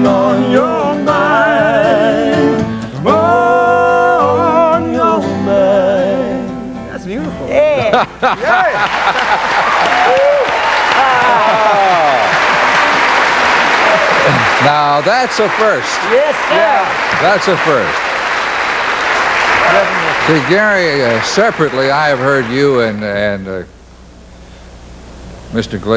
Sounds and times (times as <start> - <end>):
Applause: 8.4 - 23.3.